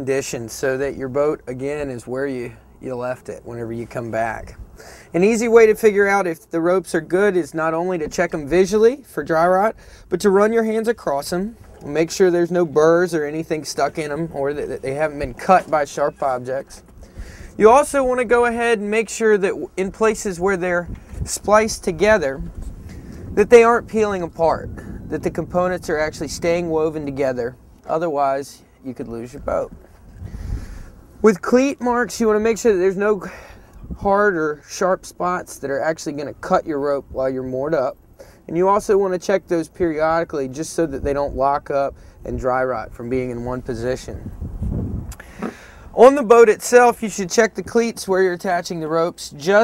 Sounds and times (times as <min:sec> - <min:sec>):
Speech: 0:00.0 - 0:16.9, 0:17.6 - 0:22.5, 0:23.4 - 0:29.8, 0:31.2 - 0:44.3, 0:46.0 - 0:49.6.